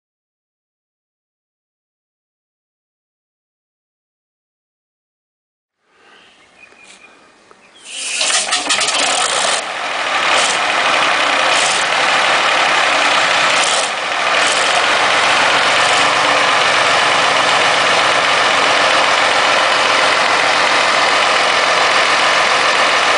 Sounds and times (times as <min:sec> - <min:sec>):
Engine: 0:05.8 - 0:23.1.